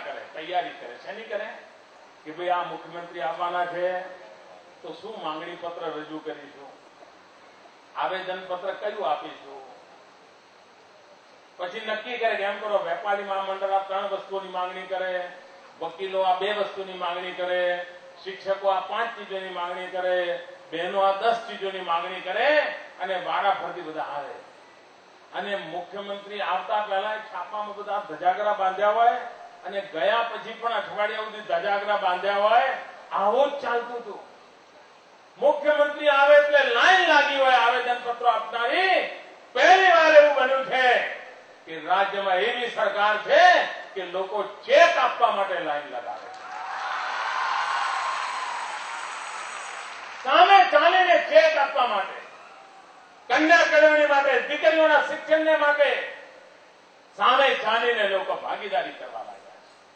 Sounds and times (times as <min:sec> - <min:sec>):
Male speech, man speaking: 0:00.0 - 0:01.7, 0:02.3 - 0:06.8, 0:08.0 - 0:09.8, 0:11.6 - 0:24.4, 0:25.3 - 0:34.3, 0:35.4 - 0:46.3, 0:50.3 - 0:52.3, 0:53.3 - 0:56.3, 0:57.2 - 0:59.6
Narration, monologue: 0:00.0 - 0:46.5, 0:50.0 - 0:59.9.